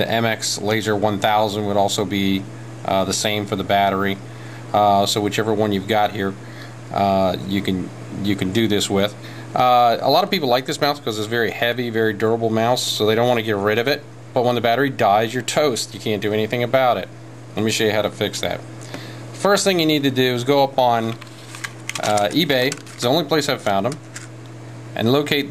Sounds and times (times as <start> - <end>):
Speech: 0.0 - 18.6, 19.4 - 21.2, 22.0 - 24.0, 25.0 - 25.5.